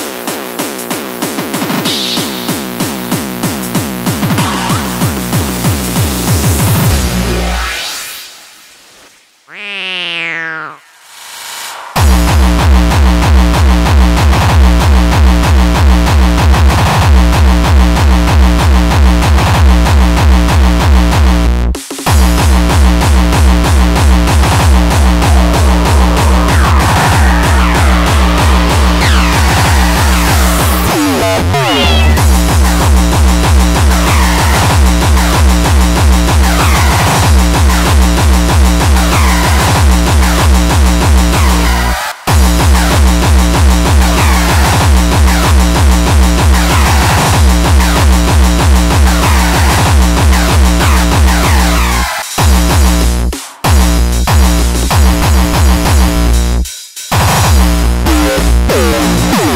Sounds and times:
Music: 0:00.0 - 0:08.9, 0:11.2 - 0:59.5
Meow: 0:09.5 - 0:10.9, 0:31.5 - 0:32.2.

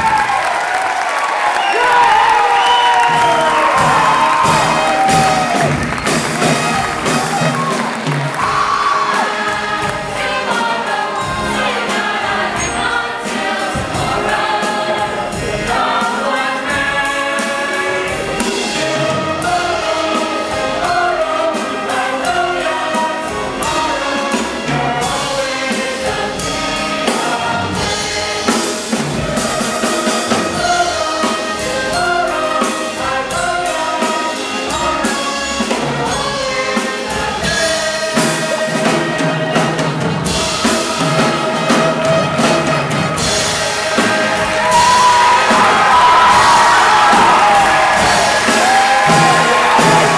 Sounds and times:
Orchestra: 0:00.0 - 0:50.1.

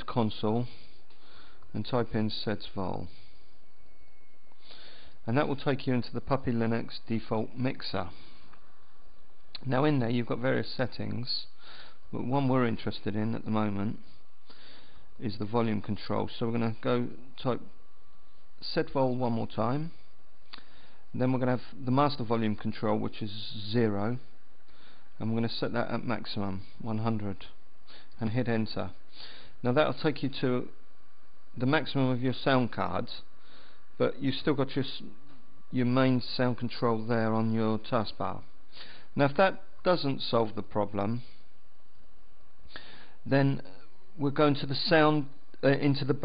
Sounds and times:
Speech: 0:00.0 - 0:00.9, 0:01.7 - 0:03.2, 0:05.2 - 0:08.2, 0:09.6 - 0:14.1, 0:15.2 - 0:17.8, 0:18.6 - 0:20.0, 0:21.1 - 0:24.4, 0:25.2 - 0:27.6, 0:28.2 - 0:29.0, 0:29.6 - 0:30.8, 0:31.6 - 0:33.3, 0:34.0 - 0:38.5, 0:39.2 - 0:41.4, 0:43.2 - 0:46.2.

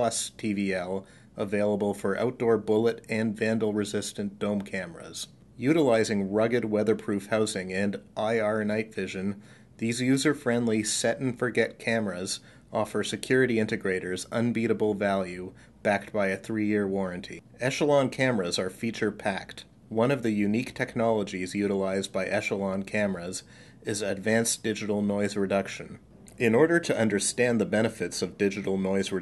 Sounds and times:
Speech: 0:00.0 - 0:29.2.

